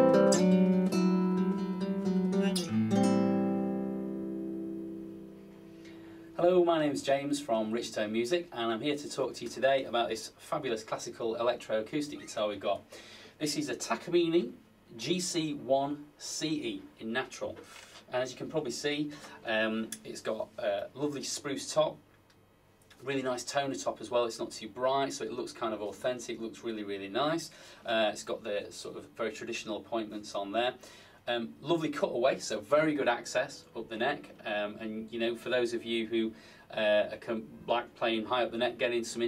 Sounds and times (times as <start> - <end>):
Speech: 6.4 - 22.0, 23.0 - 39.2.